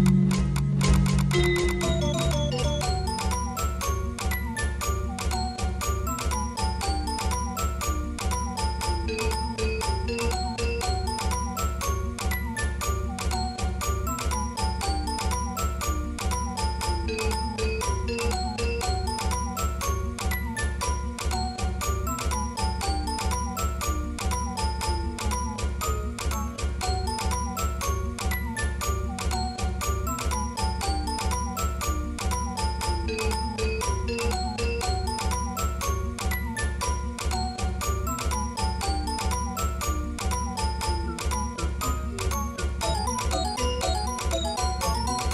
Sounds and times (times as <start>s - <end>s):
Music: 0.0s - 45.3s.